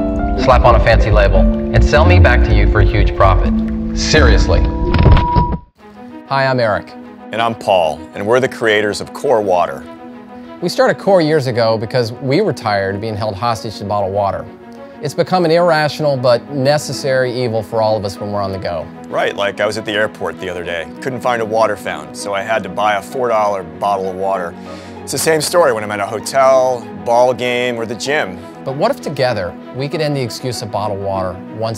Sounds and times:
Music: 0.0s - 31.7s
Speech: 0.4s - 4.7s, 6.3s - 9.8s, 10.6s - 31.7s.

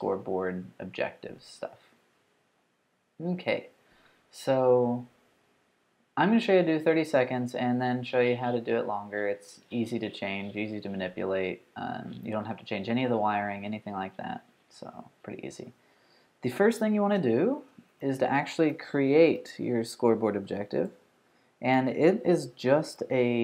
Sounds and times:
Speech: 0.0s - 1.8s, 3.2s - 5.1s, 6.2s - 15.8s, 16.4s - 21.0s, 21.6s - 23.4s.

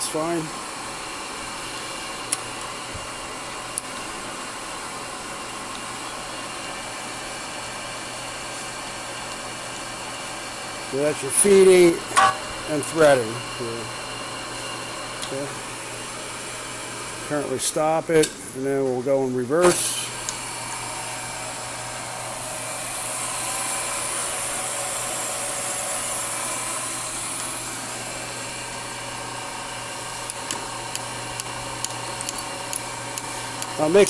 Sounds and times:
Speech: 0.0s - 0.6s, 10.9s - 12.1s, 12.7s - 13.9s, 15.2s - 15.6s, 17.3s - 20.1s, 33.8s - 34.0s
Power tool: 0.0s - 18.0s, 19.6s - 34.0s.

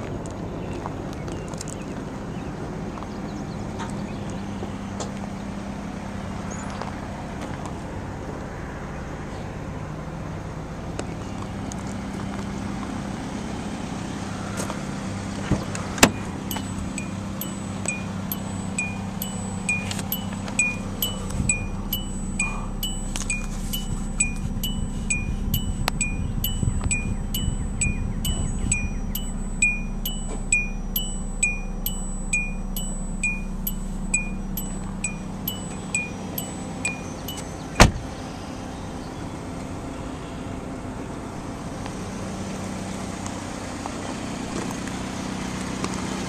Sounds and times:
Vehicle: 0.0s - 46.2s.

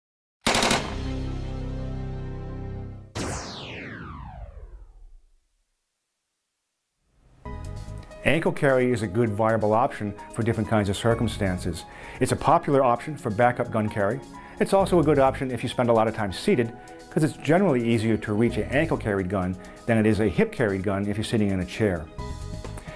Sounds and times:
Machine gun: 0.5s - 1.1s.

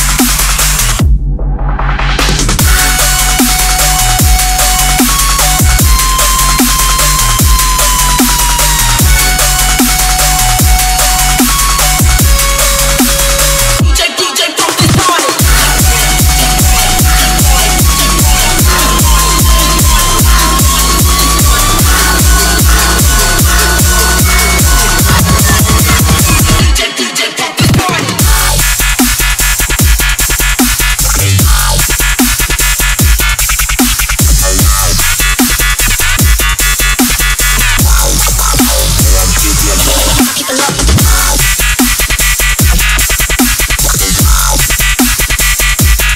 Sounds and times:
Music: 0.0s - 46.1s.

